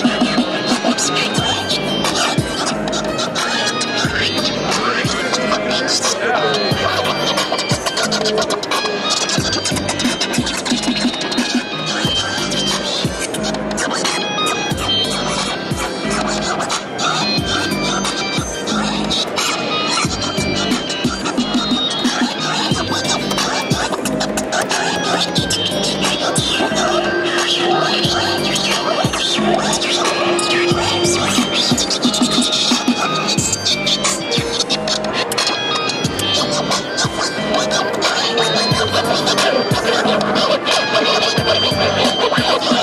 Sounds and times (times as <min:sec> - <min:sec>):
Scratching (performance technique): 0:00.0 - 0:42.8.